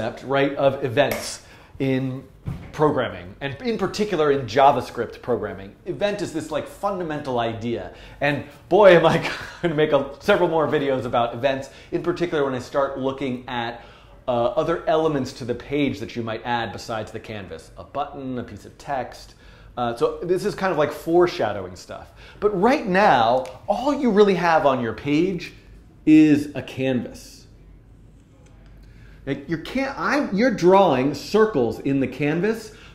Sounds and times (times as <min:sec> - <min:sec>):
Speech: 0:00.0 - 0:27.6, 0:28.4 - 0:32.8.